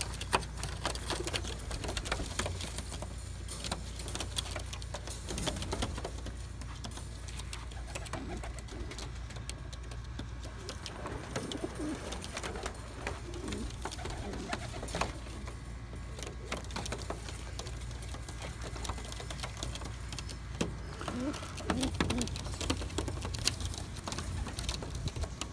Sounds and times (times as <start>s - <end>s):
Outside, rural or natural: 0.0s - 25.5s
Pigeon, dove: 0.0s - 25.5s.